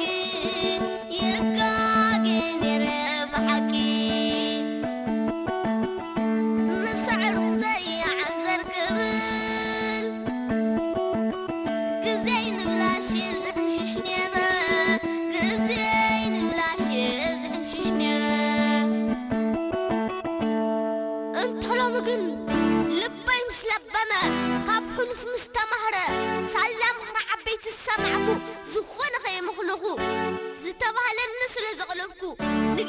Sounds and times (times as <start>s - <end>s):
Music: 0.0s - 32.8s.